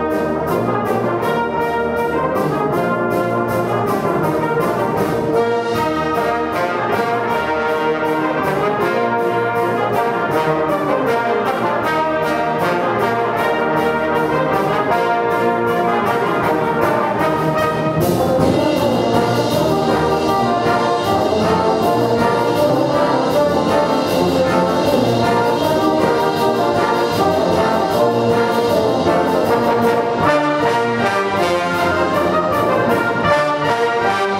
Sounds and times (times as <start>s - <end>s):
Trombone: 0.0s - 34.3s.